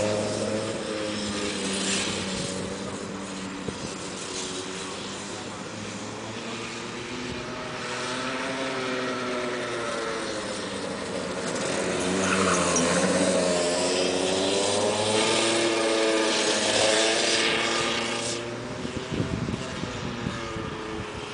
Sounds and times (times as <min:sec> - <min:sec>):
Car: 0:00.0 - 0:21.3
Outside, urban or manmade: 0:00.0 - 0:21.3.